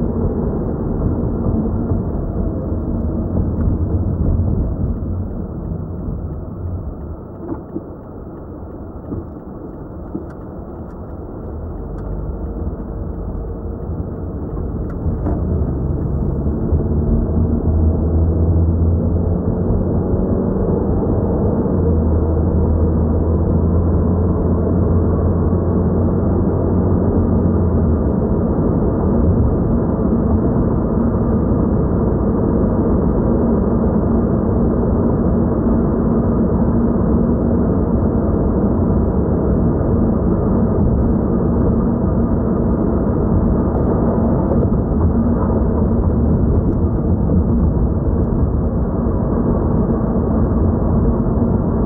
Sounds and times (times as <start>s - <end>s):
Car: 0.0s - 51.8s.